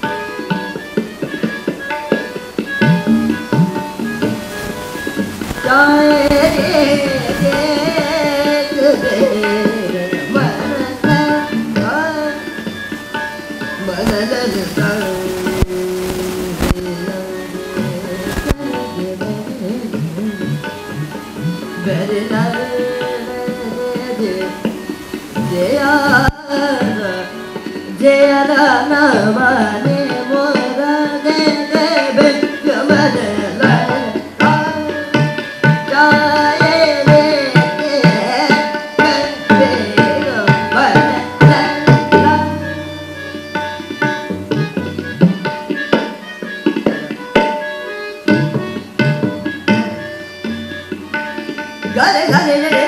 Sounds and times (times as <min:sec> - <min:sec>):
Tabla: 0:00.0 - 0:52.8
Classical music: 0:41.4 - 0:46.0.